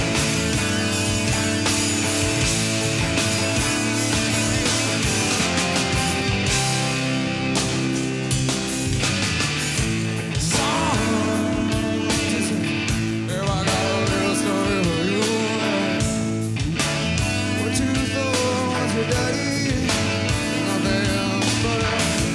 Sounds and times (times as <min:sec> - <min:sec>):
Music: 0:00.0 - 0:22.3.